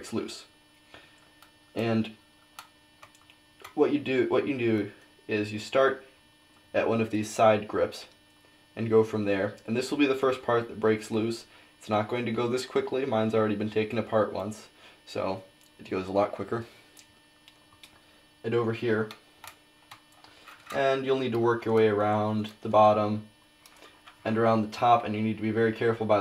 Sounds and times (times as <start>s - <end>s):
Speech: 0.0s - 0.5s, 1.8s - 2.2s, 3.7s - 6.1s, 6.7s - 8.2s, 8.8s - 16.7s, 18.4s - 19.2s, 20.7s - 23.3s, 24.2s - 26.2s.